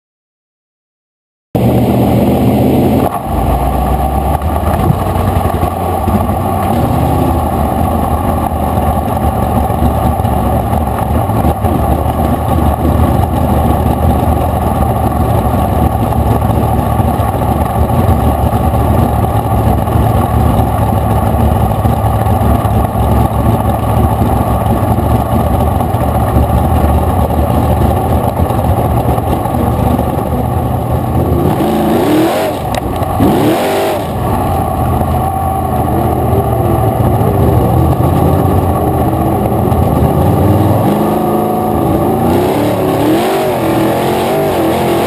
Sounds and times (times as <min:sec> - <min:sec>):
Car: 0:01.6 - 0:45.0.